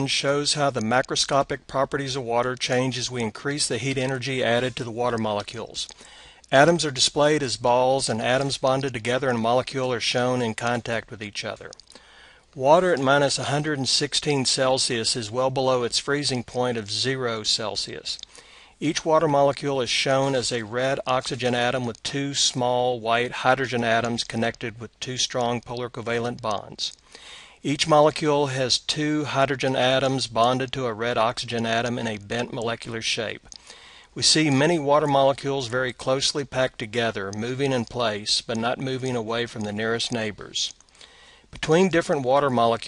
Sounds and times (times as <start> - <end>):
Speech: 0.0 - 11.8, 12.6 - 27.0, 27.6 - 33.6, 34.2 - 40.8, 41.5 - 42.8.